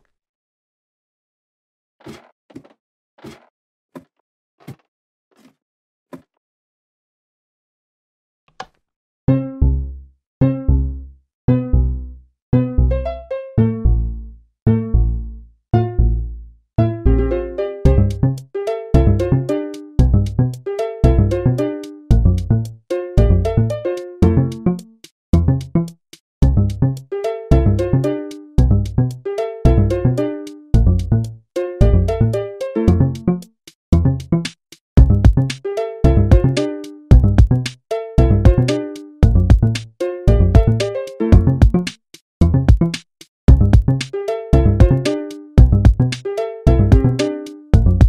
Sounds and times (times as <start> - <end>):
Music: 9.3 - 48.0.